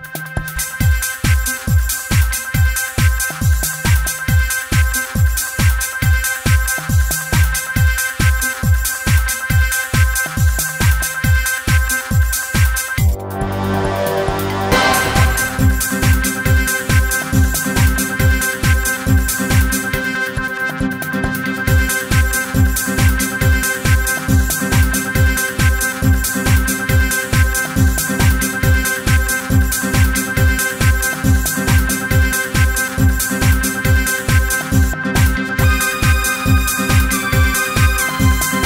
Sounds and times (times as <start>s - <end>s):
Music: 0.0s - 38.6s.